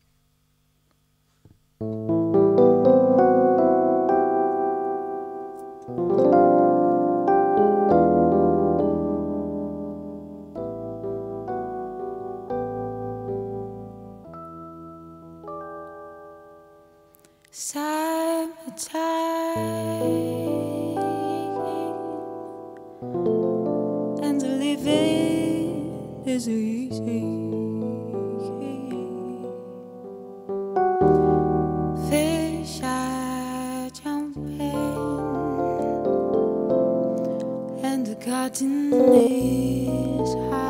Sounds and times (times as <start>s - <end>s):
Musical instrument: 1.8s - 17.3s, 19.8s - 33.0s, 34.4s - 40.7s.